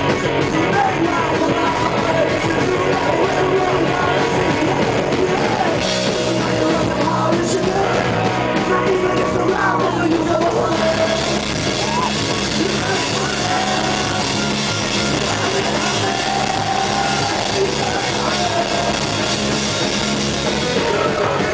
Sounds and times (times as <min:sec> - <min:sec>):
Music: 0:00.0 - 0:21.5.